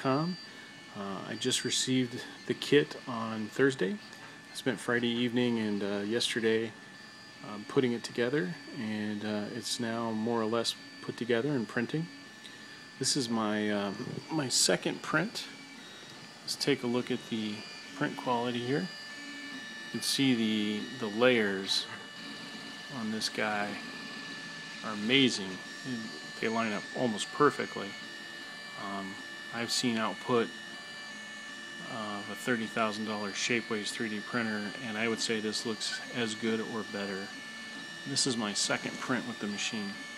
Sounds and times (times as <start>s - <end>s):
Speech: 0.0s - 0.4s, 1.0s - 4.0s, 4.6s - 6.8s, 7.4s - 12.2s, 13.0s - 15.5s, 16.5s - 18.9s, 20.0s - 22.0s, 22.9s - 23.8s, 24.8s - 28.0s, 28.8s - 30.5s, 31.8s - 37.4s, 38.0s - 40.0s
Printer: 0.0s - 40.1s.